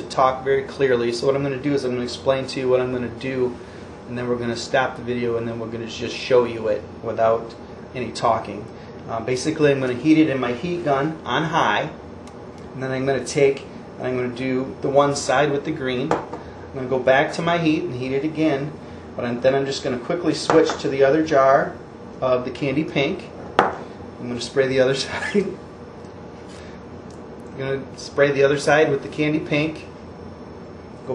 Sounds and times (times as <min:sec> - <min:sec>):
Speech: 0:00.0 - 0:12.0, 0:12.8 - 0:16.2, 0:16.8 - 0:23.4, 0:24.2 - 0:25.6, 0:27.5 - 0:30.0.